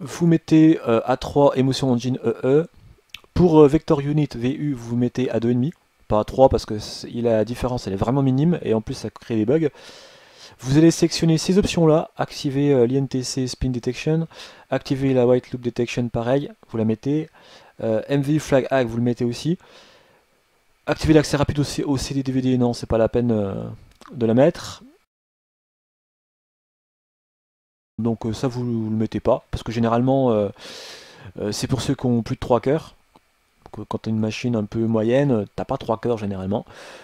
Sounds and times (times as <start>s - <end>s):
Speech: 0.0s - 9.8s, 10.6s - 19.6s, 20.9s - 25.0s, 28.0s - 30.6s, 31.3s - 33.0s, 33.6s - 36.7s.